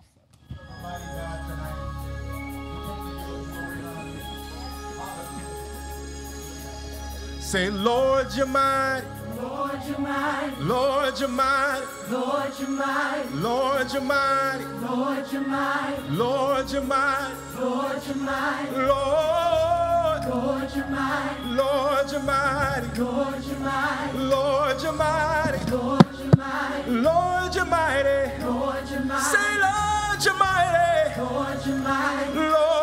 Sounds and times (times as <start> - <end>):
Music: 0.0 - 32.8.